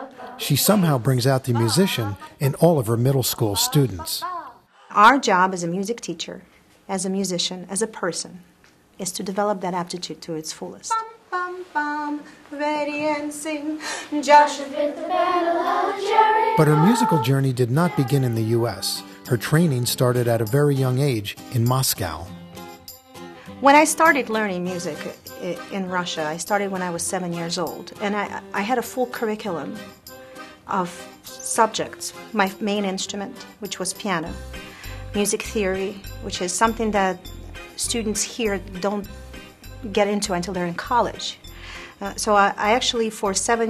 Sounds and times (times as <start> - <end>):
Music: 0.0 - 4.3, 10.9 - 43.7
Speech: 0.4 - 8.4, 9.0 - 10.9, 16.6 - 22.3, 42.0 - 43.7.